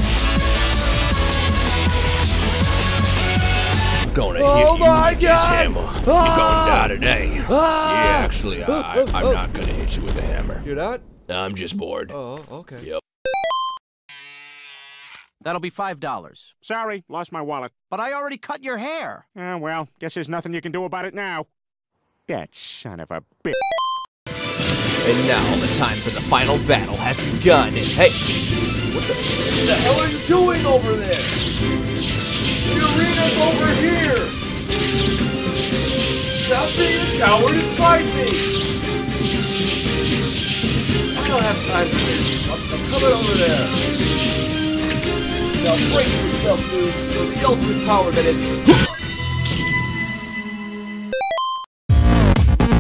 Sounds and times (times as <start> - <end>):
Speech: 4.1 - 13.0, 15.5 - 21.5, 22.3 - 23.6, 25.1 - 28.2, 29.6 - 31.2, 32.7 - 34.3, 36.5 - 38.4, 41.2 - 43.8, 45.6 - 48.5.